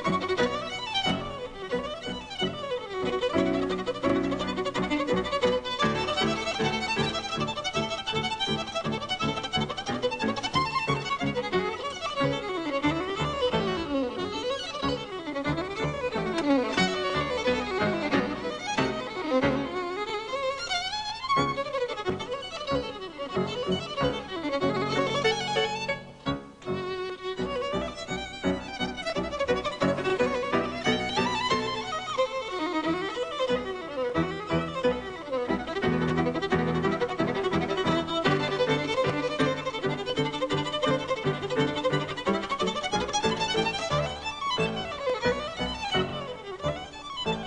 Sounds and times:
Violin, fiddle: 0:00.0 - 0:47.4.

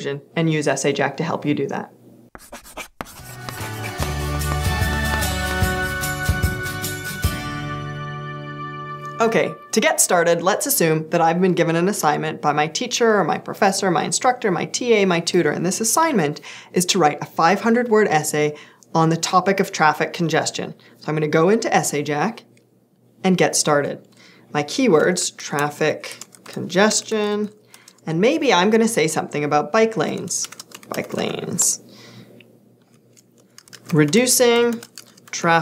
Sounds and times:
Speech: 0:00.0 - 0:01.9, 0:09.2 - 0:22.5, 0:23.2 - 0:24.0, 0:24.6 - 0:31.8, 0:33.9 - 0:35.6.

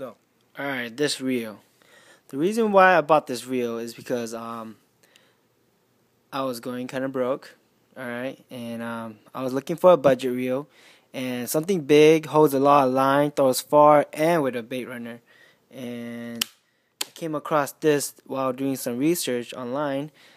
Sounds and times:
Speech: 0:00.0 - 0:01.6, 0:02.3 - 0:04.8, 0:06.3 - 0:16.4, 0:17.2 - 0:20.2.

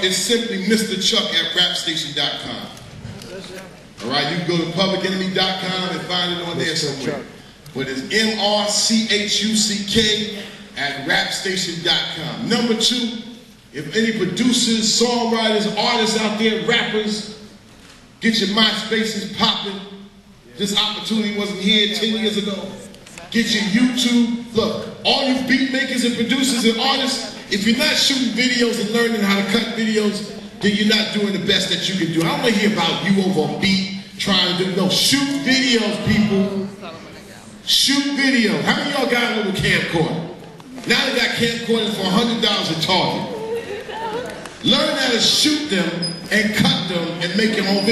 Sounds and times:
Male speech, man speaking: 0:00.0 - 0:17.5, 0:18.2 - 0:36.8, 0:37.7 - 0:43.4, 0:44.6 - 0:47.9
Narration, monologue: 0:00.0 - 0:43.5, 0:44.5 - 0:47.9.

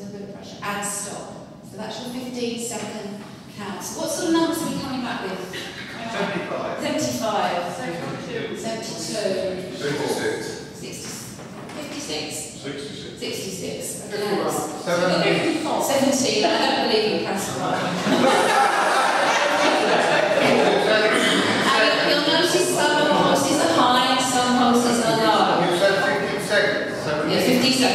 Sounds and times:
Inside, large room or hall: 0:00.0 - 0:27.9
Speech: 0:00.0 - 0:27.9.

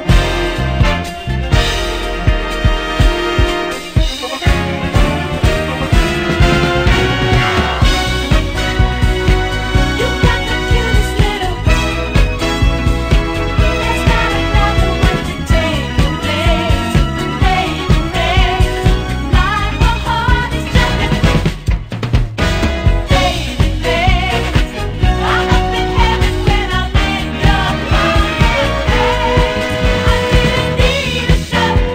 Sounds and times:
Music: 0:00.0 - 0:31.9.

